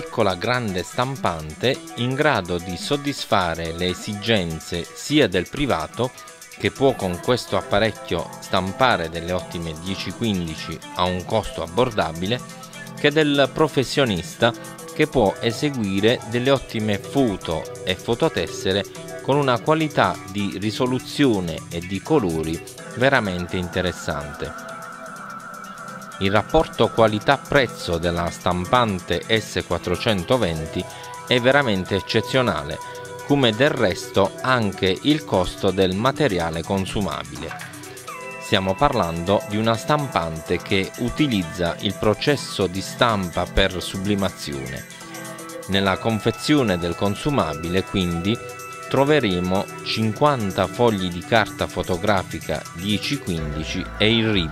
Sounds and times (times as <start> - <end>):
Speech: 0.0 - 12.4, 13.0 - 24.6, 26.2 - 37.7, 38.4 - 44.9, 45.7 - 48.4, 49.0 - 54.5
Music: 0.0 - 54.5.